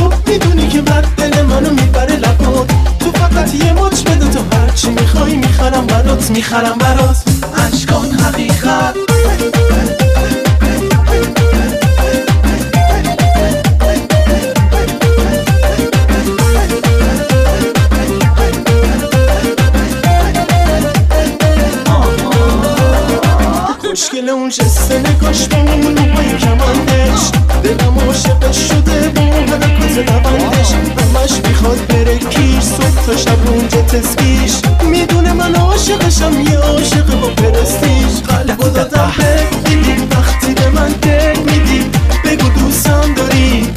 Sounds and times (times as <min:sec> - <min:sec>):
Exciting music: 0:00.0 - 0:23.9, 0:24.6 - 0:43.7
Soundtrack music: 0:00.0 - 0:24.0, 0:24.6 - 0:43.7
Dance music: 0:00.0 - 0:43.7
Disco: 0:00.0 - 0:43.7.